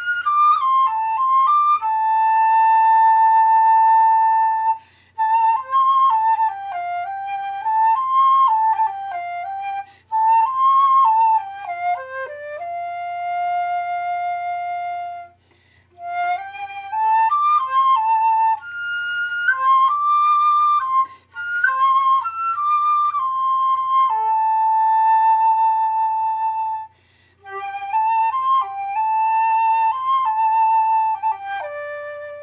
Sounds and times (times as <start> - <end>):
Flute: 0.0 - 32.4.